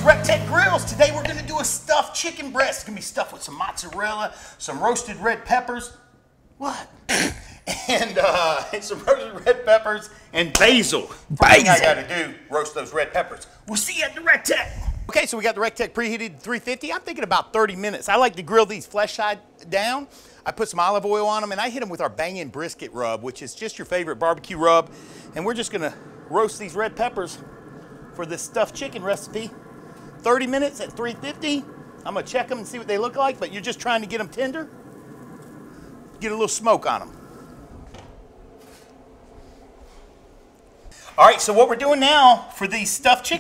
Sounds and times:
Speech: 0.0 - 6.0, 6.6 - 7.0, 7.9 - 27.4, 28.2 - 29.6, 30.2 - 34.7, 36.2 - 37.1, 41.0 - 43.4.

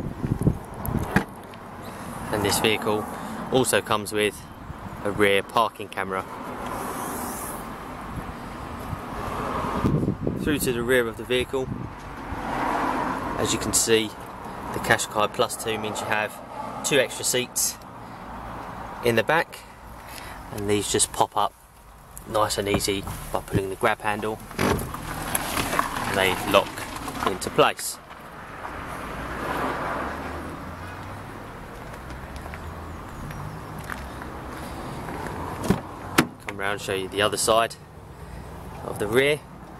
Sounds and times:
Vehicle: 0.0 - 39.7
Speech: 2.3 - 6.3, 10.4 - 11.7, 13.4 - 14.2, 14.8 - 17.8, 19.0 - 19.7, 20.5 - 21.5, 22.2 - 24.4, 26.0 - 28.0, 36.5 - 37.8, 38.8 - 39.5.

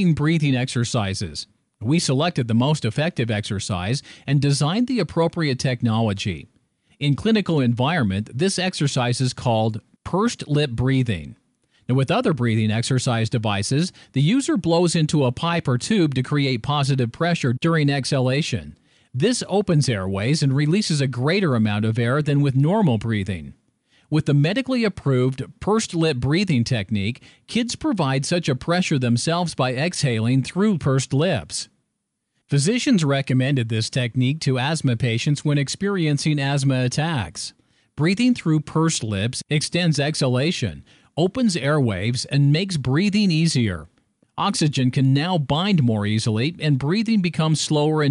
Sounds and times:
Speech: 0.0 - 31.8, 32.5 - 48.1.

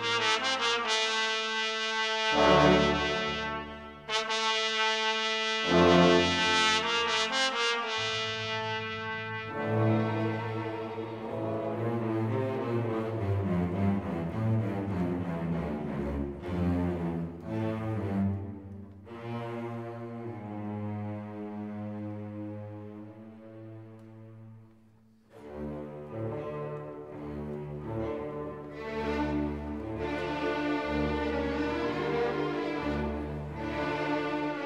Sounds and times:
Music: 0.0 - 34.6.

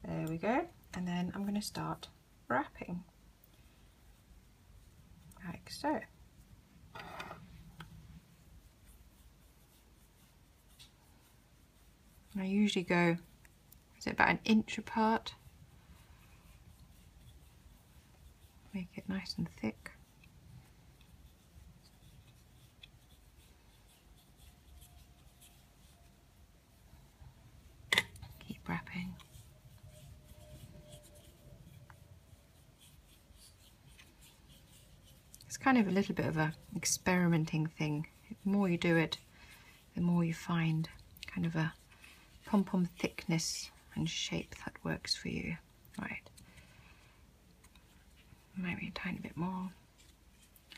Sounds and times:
Inside, small room: 0.0 - 50.7.

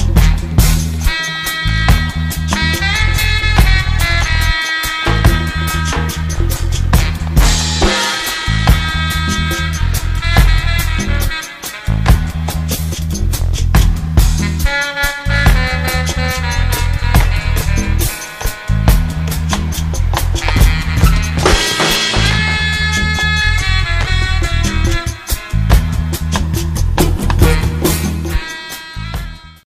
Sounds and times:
Music: 0.0 - 29.6.

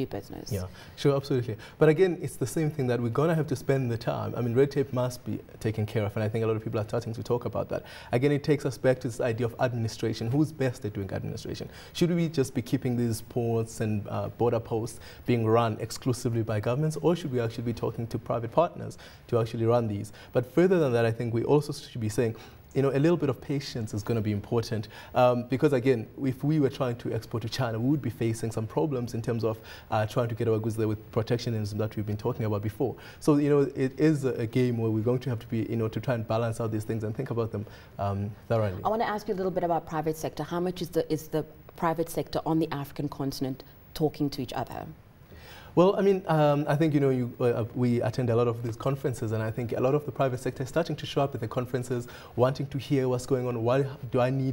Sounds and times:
Speech: 0.0 - 44.9.

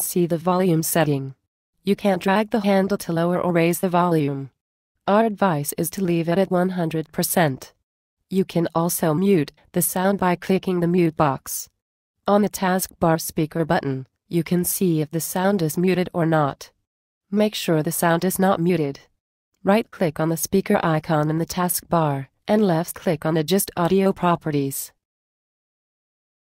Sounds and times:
Speech: 0.0 - 4.5, 5.1 - 11.7, 12.3 - 16.8, 17.4 - 25.0.

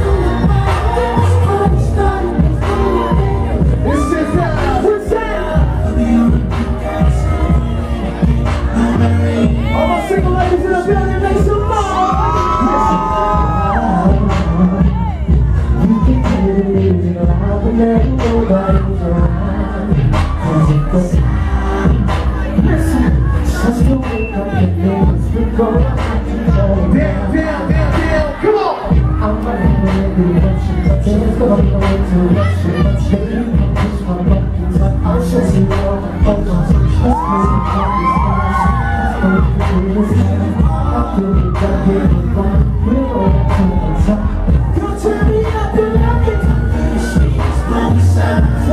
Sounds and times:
Music: 0.0 - 48.7.

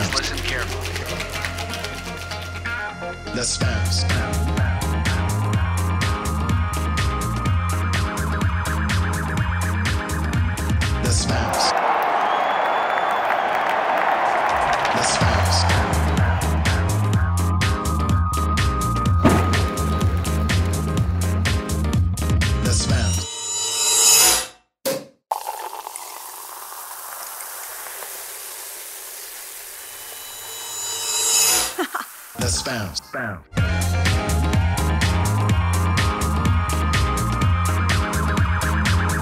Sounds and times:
Music: 0.0 - 11.7, 13.8 - 24.4, 32.4 - 39.2.

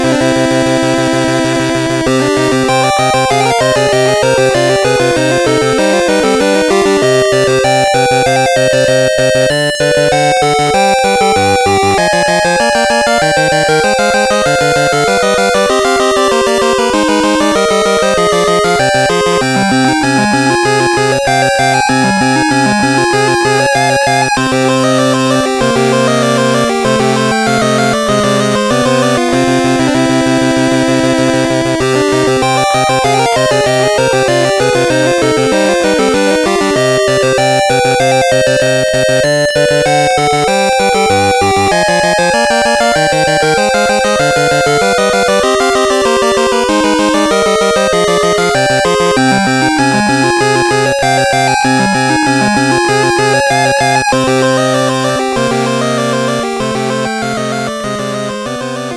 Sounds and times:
Music: 0.0 - 58.9.

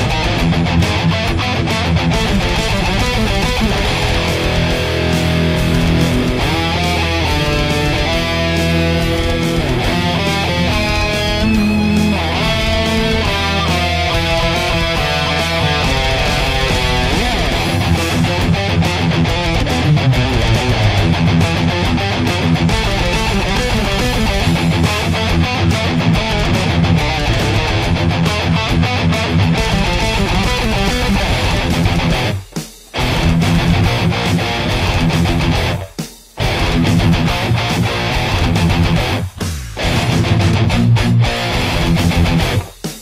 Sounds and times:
Electric guitar: 0.0 - 43.0.

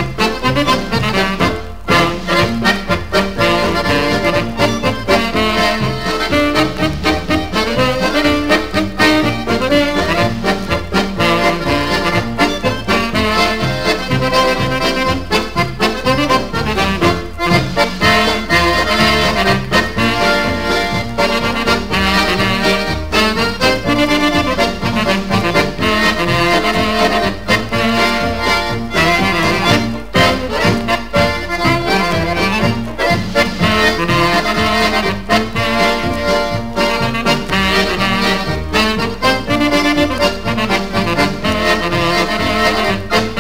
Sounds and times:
Music: 0.0 - 43.4.

